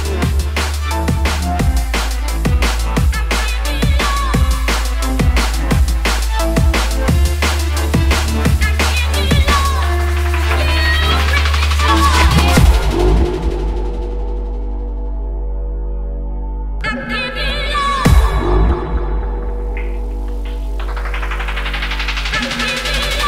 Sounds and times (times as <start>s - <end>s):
Drum and bass: 0.0s - 23.2s.